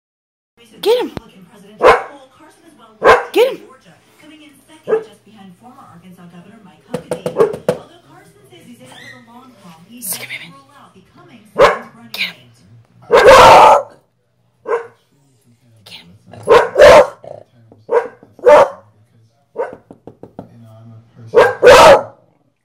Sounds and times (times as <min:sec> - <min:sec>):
Speech: 0:00.6 - 0:13.1
Bark: 0:01.8 - 0:02.2, 0:03.0 - 0:03.5, 0:04.9 - 0:05.1, 0:07.3 - 0:07.6, 0:11.6 - 0:12.0, 0:13.0 - 0:14.0, 0:14.6 - 0:15.0, 0:16.4 - 0:18.9, 0:19.5 - 0:19.9, 0:21.3 - 0:22.2.